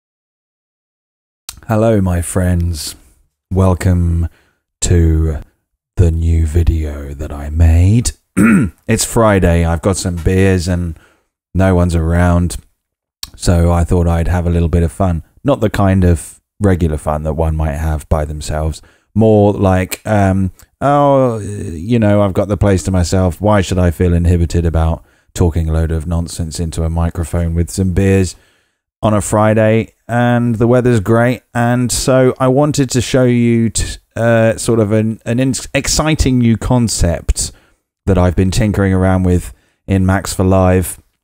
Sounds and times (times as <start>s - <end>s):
Speech: 1.5s - 11.0s, 11.6s - 28.4s, 29.0s - 41.1s.